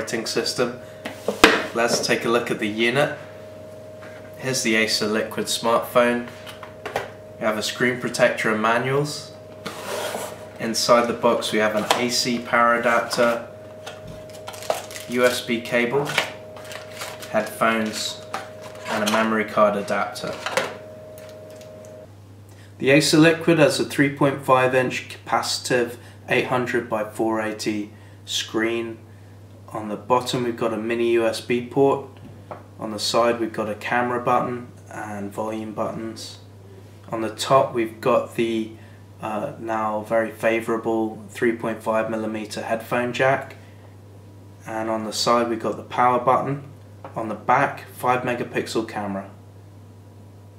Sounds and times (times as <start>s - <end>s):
Speech: 0.0s - 0.8s, 1.7s - 3.2s, 4.4s - 6.3s, 7.4s - 9.4s, 10.6s - 13.5s, 15.1s - 16.3s, 17.2s - 20.5s, 22.8s - 29.0s, 29.7s - 32.2s, 32.8s - 36.5s, 37.1s - 43.6s, 44.6s - 49.4s.